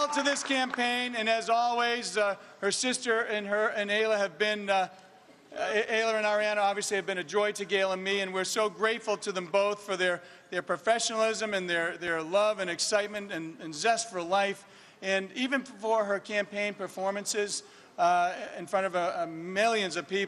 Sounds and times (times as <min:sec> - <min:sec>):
Male speech, man speaking: 0:00.0 - 0:04.9, 0:05.5 - 0:20.2
Narration, monologue: 0:00.0 - 0:20.2.